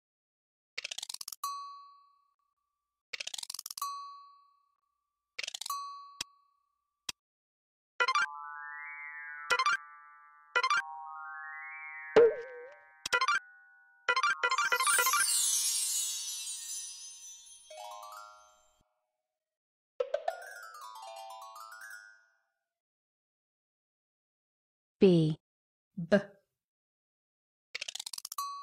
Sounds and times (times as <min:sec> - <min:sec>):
Music: 0:08.0 - 0:19.2, 0:20.0 - 0:22.8.